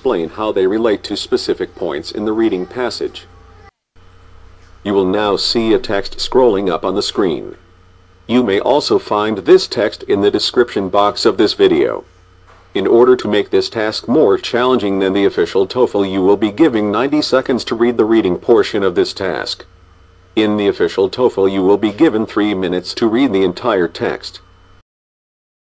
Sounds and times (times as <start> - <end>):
Speech: 0.0 - 3.7, 4.8 - 7.6, 8.3 - 12.1, 12.8 - 19.7, 20.4 - 24.5.